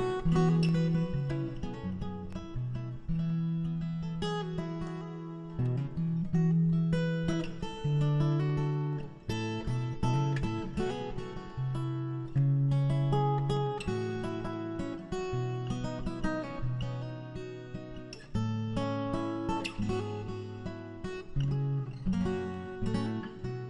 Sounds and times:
Acoustic guitar: 0.0s - 23.7s.

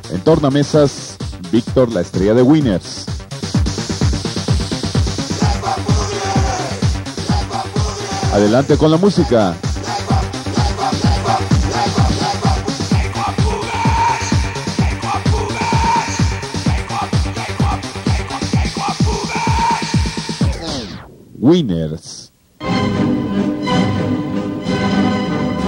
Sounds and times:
Speech: 0.0s - 3.1s, 8.3s - 9.6s, 21.4s - 22.3s
Techno: 0.0s - 21.3s.

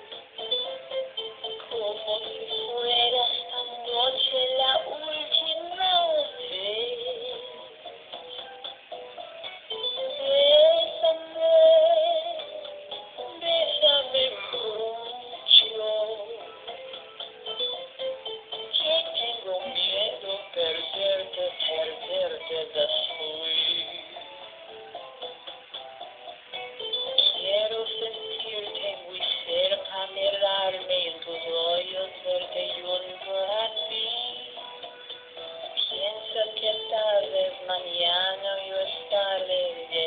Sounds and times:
Music: 0.0s - 40.0s
Synthetic singing: 1.4s - 7.8s, 10.0s - 12.6s, 13.2s - 16.8s, 18.7s - 24.3s, 27.2s - 34.6s, 35.8s - 40.0s
Male singing: 1.7s - 7.6s, 13.3s - 16.6s, 18.8s - 24.3s, 27.2s - 34.6s, 35.8s - 40.0s.

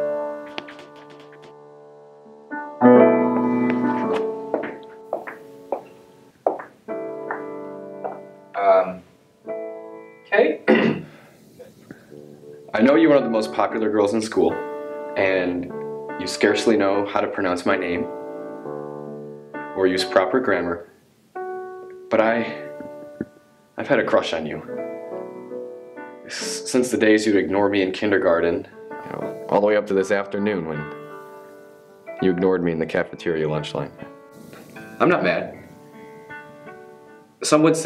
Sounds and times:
Music: 0.0s - 37.8s
Narration, monologue: 9.9s - 18.4s, 21.8s - 25.2s, 26.0s - 37.8s.

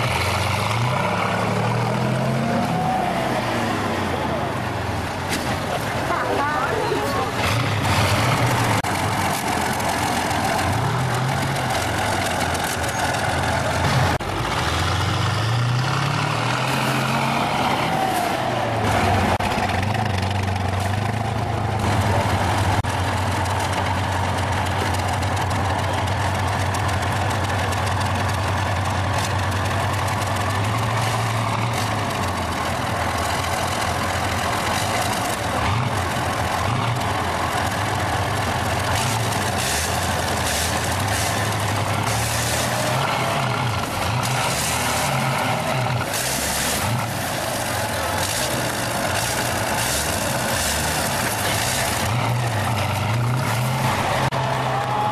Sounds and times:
Motor vehicle (road): 0.0s - 55.1s.

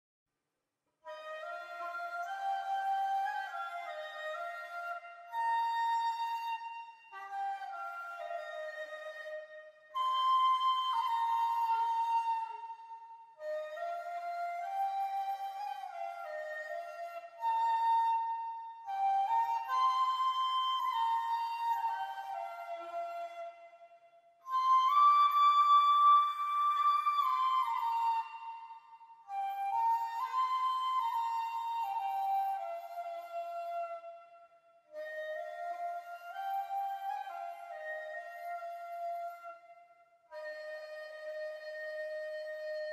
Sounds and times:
Flute: 1.0s - 42.9s.

